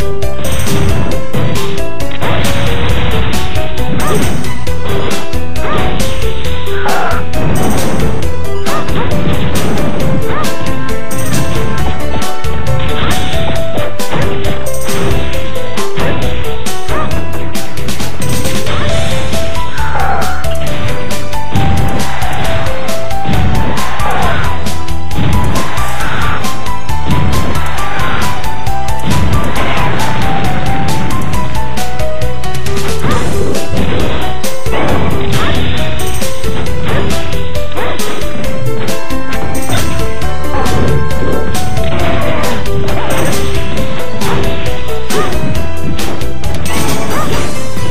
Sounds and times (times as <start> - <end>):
Music: 0.0 - 47.9.